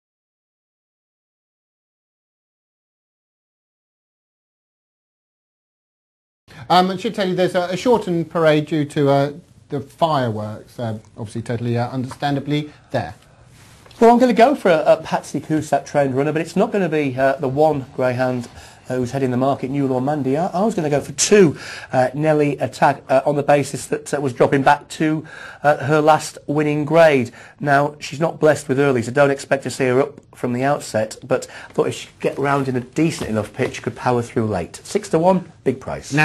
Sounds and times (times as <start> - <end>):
Speech: 6.6 - 13.2, 14.0 - 36.2.